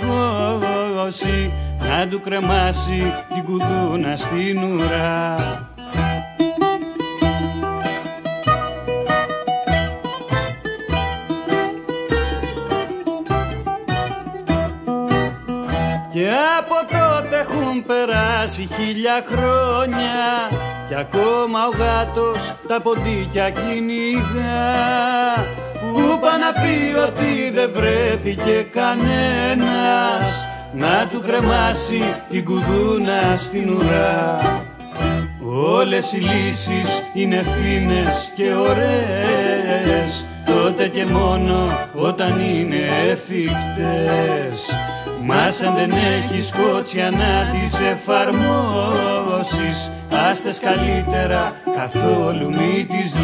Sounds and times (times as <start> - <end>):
Music: 0.0 - 53.2.